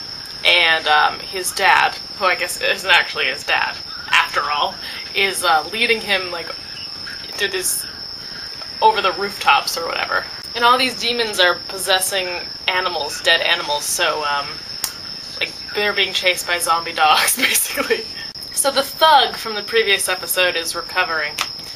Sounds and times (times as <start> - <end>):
Inside, small room: 0.0 - 21.7
Speech: 0.4 - 6.6, 7.3 - 7.9, 8.8 - 14.6, 15.4 - 21.4.